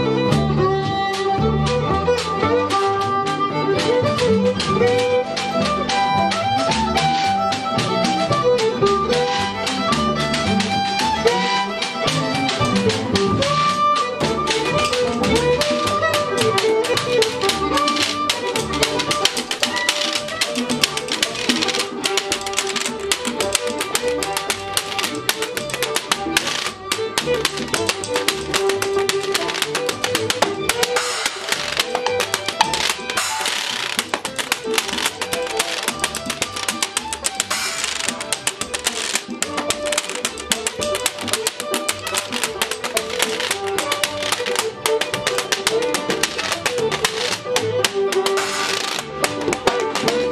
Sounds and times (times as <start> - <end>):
Violin, fiddle: 0.0 - 50.3.